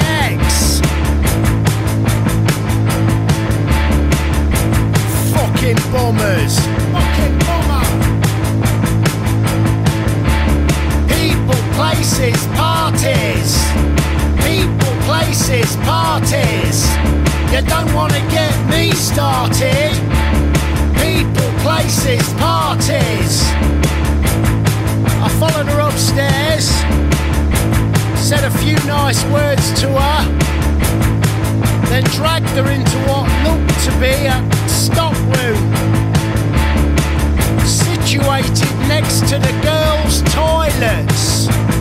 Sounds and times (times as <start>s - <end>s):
Music: 0.0s - 41.8s.